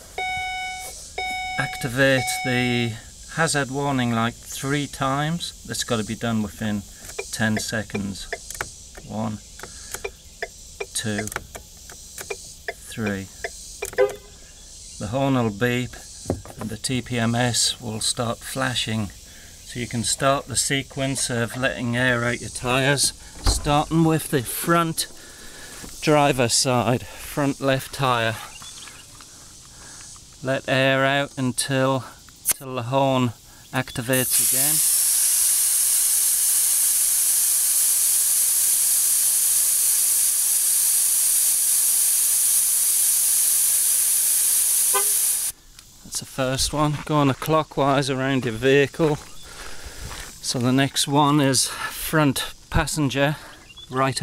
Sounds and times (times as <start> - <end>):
Speech: 1.6 - 8.4, 9.0 - 9.4, 10.9 - 11.4, 12.8 - 13.3, 15.0 - 25.1, 26.0 - 28.6, 30.4 - 34.8, 46.0 - 49.2, 50.4 - 54.2.